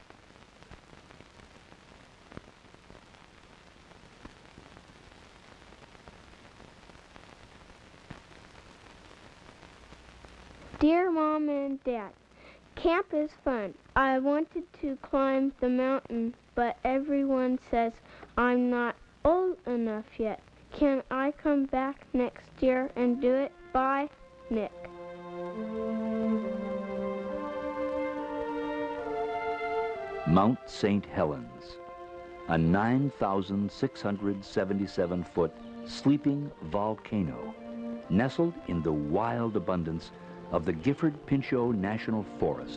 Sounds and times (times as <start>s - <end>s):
Speech: 10.8s - 12.1s, 12.8s - 24.8s, 30.3s - 31.8s, 32.5s - 37.5s, 38.1s - 42.7s
Music: 12.9s - 42.7s.